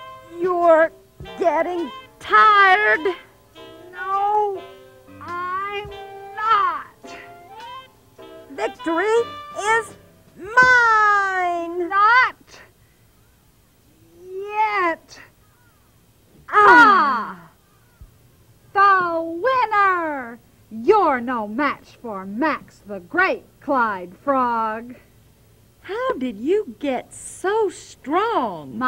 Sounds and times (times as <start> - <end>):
Speech: 0.3 - 3.2, 4.0 - 4.6, 5.2 - 6.9, 8.5 - 12.7, 14.2 - 15.3, 16.5 - 17.5, 18.7 - 25.0, 25.8 - 28.8.